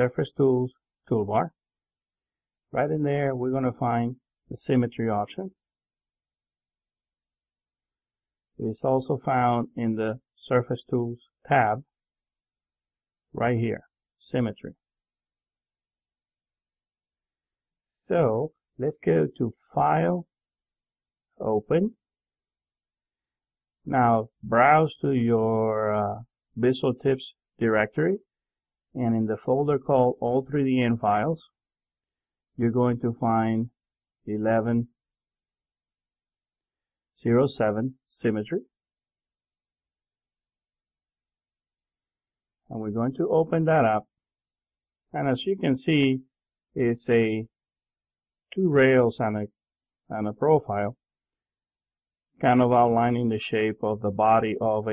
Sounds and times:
Speech: 0.0s - 1.6s, 2.7s - 5.6s, 8.6s - 11.9s, 13.4s - 14.8s, 18.1s - 20.3s, 21.4s - 22.0s, 23.9s - 28.3s, 29.0s - 31.5s, 32.6s - 35.0s, 37.2s - 38.7s, 42.7s - 44.1s, 45.2s - 47.6s, 48.5s - 51.0s, 52.4s - 54.9s.

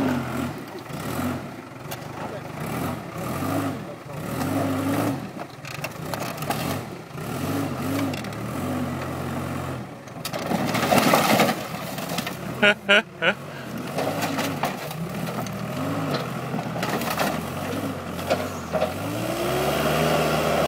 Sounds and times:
Vehicle: 0.0s - 20.6s.

